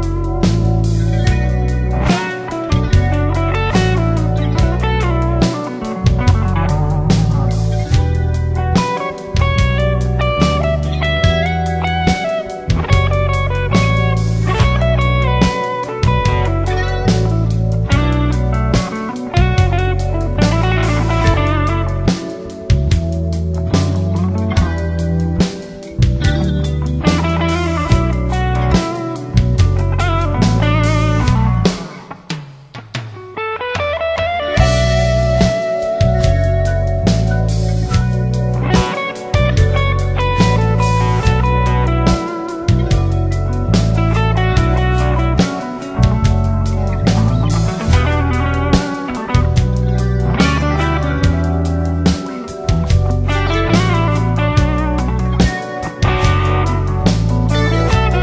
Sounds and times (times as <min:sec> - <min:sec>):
Steel guitar, slide guitar: 0:00.0 - 0:32.2, 0:33.3 - 0:58.2
Inside, small room: 0:00.0 - 0:58.2.